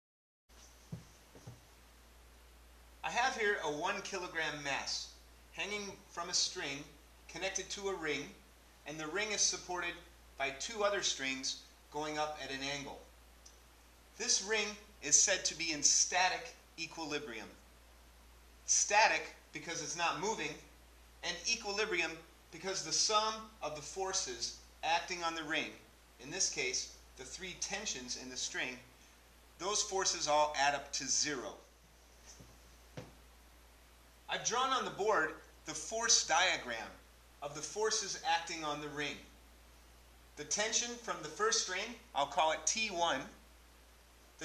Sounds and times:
Speech: 0:03.1 - 0:13.1, 0:14.2 - 0:17.6, 0:18.7 - 0:28.9, 0:29.6 - 0:31.7, 0:34.3 - 0:39.3, 0:40.4 - 0:43.4.

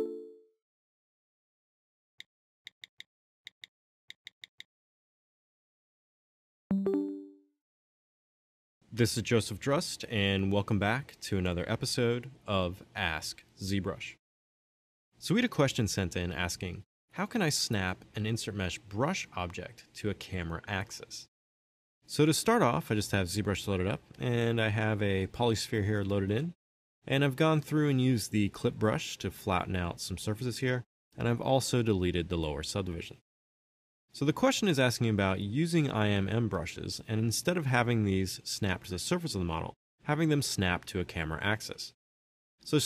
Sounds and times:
Speech: 0:08.9 - 0:14.2, 0:15.2 - 0:21.3, 0:22.1 - 0:33.2, 0:34.2 - 0:42.0, 0:42.6 - 0:42.8.

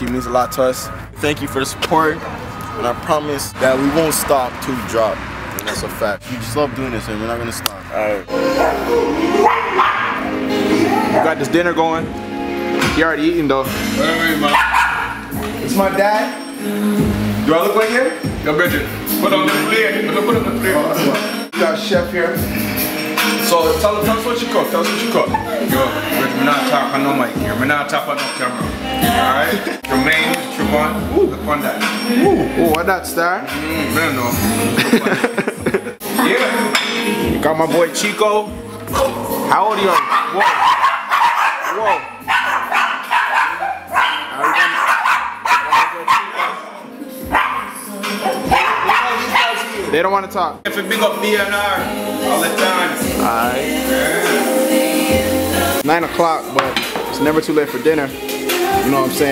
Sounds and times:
Music: 0:00.0 - 0:05.1, 0:05.8 - 0:59.3
Bark: 0:09.4 - 0:10.3, 0:14.5 - 0:15.2, 0:39.9 - 0:46.7, 0:47.3 - 0:49.7.

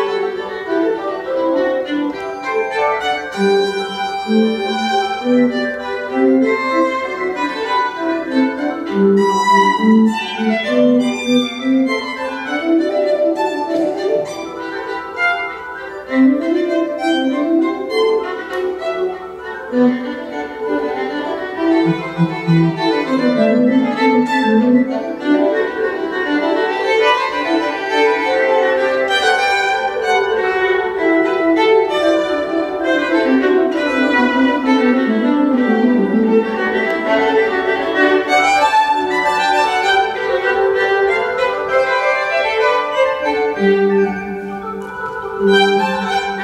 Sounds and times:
Violin, fiddle: 0:00.0 - 0:46.4.

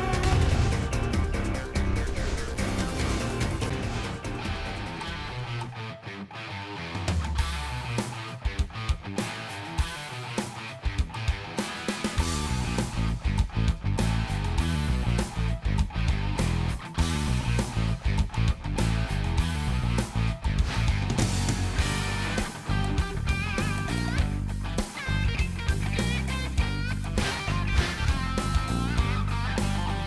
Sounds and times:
Music: 0:00.0 - 0:30.0.

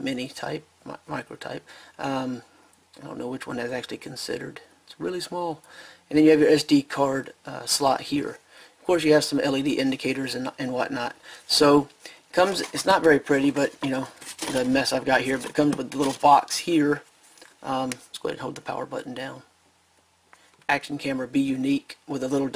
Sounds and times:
Speech: 0:00.0 - 0:19.5, 0:20.7 - 0:22.5.

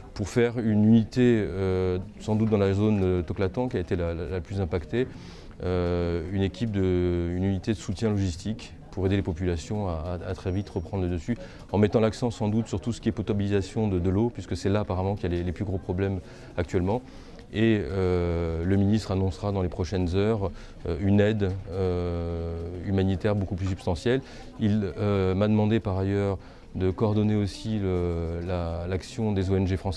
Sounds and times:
Speech: 0:00.0 - 0:29.9.

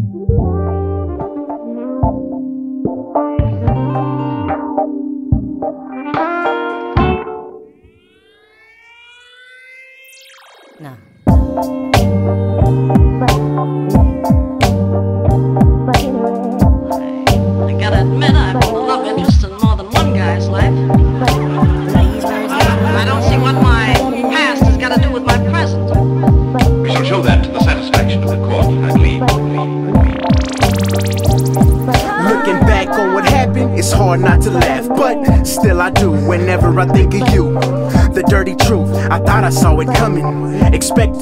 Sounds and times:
Music: 0:00.0 - 0:08.0, 0:11.3 - 0:41.2
Sound effect: 0:07.8 - 0:12.1, 0:30.0 - 0:33.4.

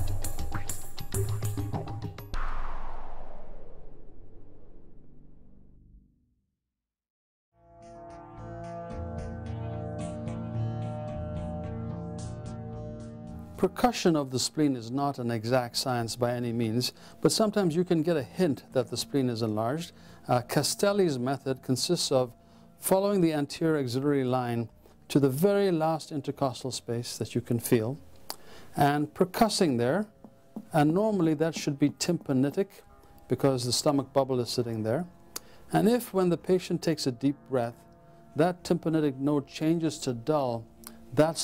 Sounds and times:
Speech: 0:13.6 - 0:28.0, 0:28.8 - 0:30.1, 0:30.7 - 0:35.1, 0:35.7 - 0:37.8, 0:38.4 - 0:40.6, 0:41.2 - 0:41.4.

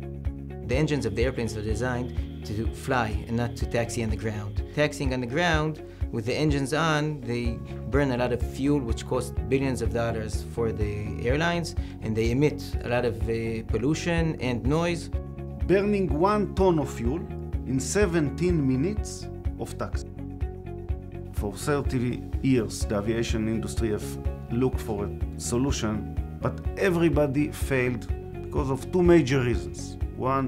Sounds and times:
Music: 0:00.0 - 0:30.4
Speech: 0:00.7 - 0:15.1, 0:15.7 - 0:20.0, 0:21.4 - 0:30.4.

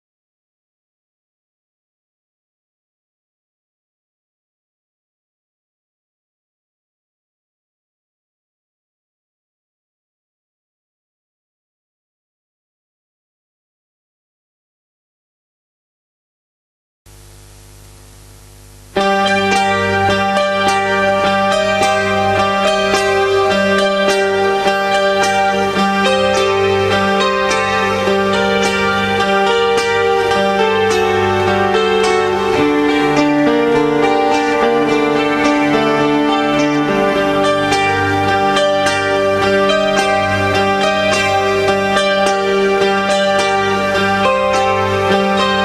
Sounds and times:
Strum: 0:17.1 - 0:45.6.

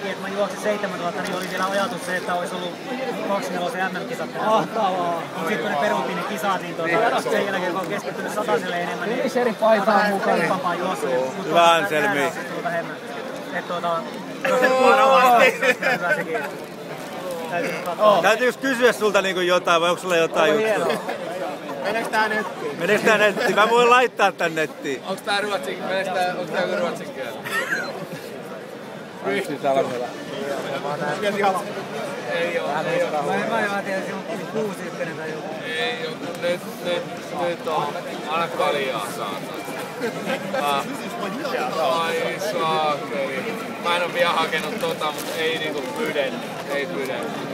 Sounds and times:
Outside, urban or manmade: 0:00.0 - 0:47.5.

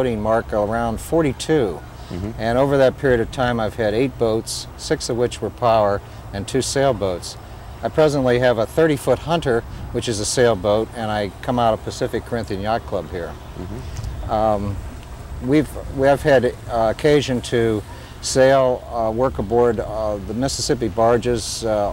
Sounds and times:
Speech: 0:00.0 - 0:14.8, 0:15.4 - 0:21.9.

